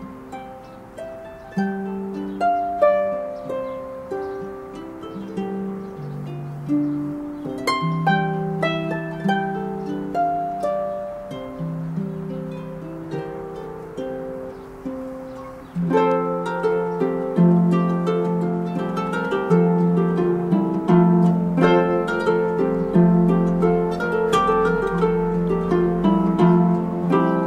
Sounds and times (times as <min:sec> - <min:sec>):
Harp: 0:00.0 - 0:27.4
Pizzicato: 0:00.0 - 0:27.4.